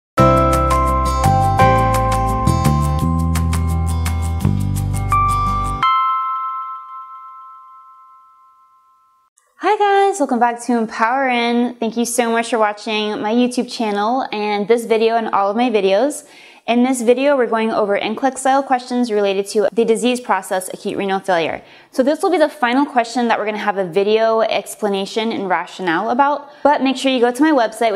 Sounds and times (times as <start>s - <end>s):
Marimba, xylophone: 0.2s - 8.8s
Glockenspiel: 0.2s - 9.3s.